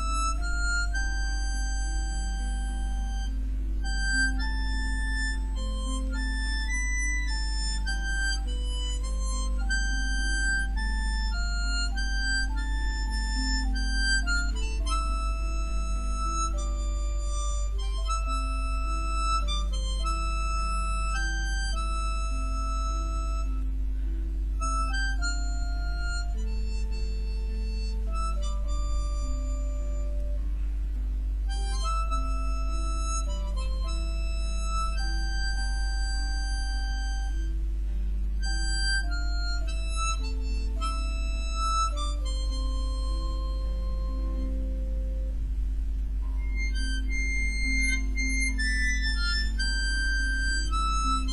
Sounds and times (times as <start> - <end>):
Harmonica: 0.0 - 51.3.